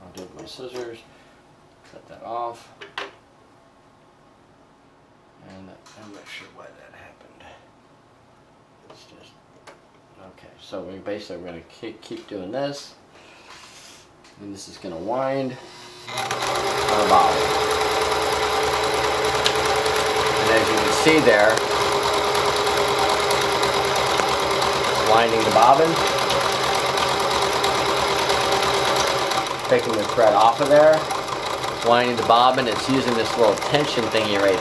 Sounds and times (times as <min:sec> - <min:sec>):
Speech: 0:00.0 - 0:01.1, 0:01.9 - 0:02.7, 0:05.4 - 0:07.6, 0:08.9 - 0:09.4, 0:10.2 - 0:13.0, 0:14.4 - 0:15.6, 0:16.9 - 0:17.5, 0:20.4 - 0:21.6, 0:25.0 - 0:26.0, 0:29.7 - 0:31.1, 0:31.8 - 0:34.6
Inside, small room: 0:00.0 - 0:34.6
Sewing machine: 0:15.7 - 0:34.6.